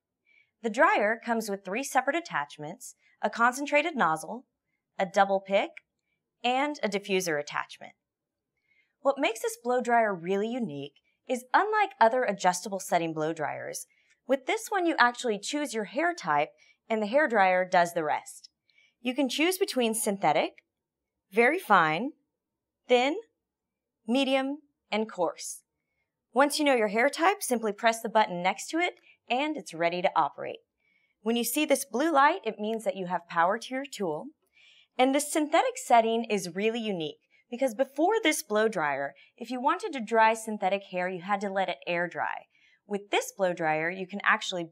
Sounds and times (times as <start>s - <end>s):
Speech: 0.7s - 4.4s, 5.0s - 5.8s, 6.5s - 8.0s, 9.1s - 18.5s, 19.1s - 20.6s, 21.4s - 22.2s, 22.9s - 23.3s, 24.1s - 25.6s, 26.4s - 30.6s, 31.3s - 34.3s, 35.0s - 44.7s.